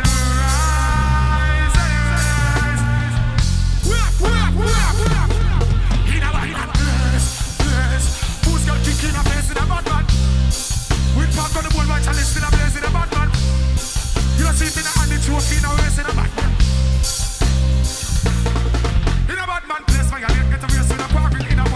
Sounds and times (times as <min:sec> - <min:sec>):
Music: 0:00.0 - 0:21.7.